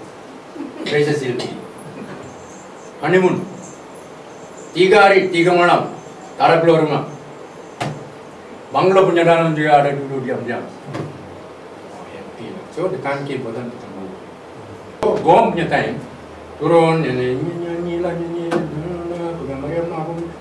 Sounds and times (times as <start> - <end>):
Speech: 0.8 - 1.6, 3.0 - 3.5, 4.8 - 7.2, 8.8 - 10.8, 11.9 - 14.3, 15.0 - 20.3.